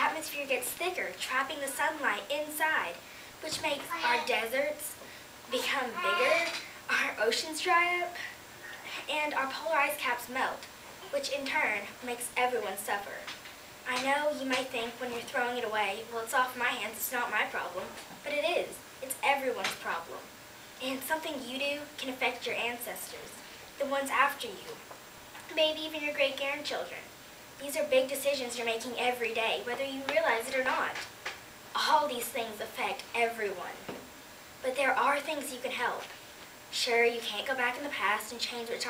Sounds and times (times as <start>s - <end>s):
Child speech, kid speaking: 0.0s - 8.3s, 9.1s - 13.3s, 13.9s - 24.8s, 25.5s - 31.0s, 31.8s - 33.8s, 34.6s - 36.1s, 36.7s - 38.8s
Female speech, woman speaking: 0.0s - 8.3s, 9.0s - 13.3s, 13.9s - 24.8s, 25.5s - 31.1s, 31.8s - 33.9s, 34.6s - 36.1s, 36.7s - 38.8s
Narration, monologue: 0.0s - 38.8s.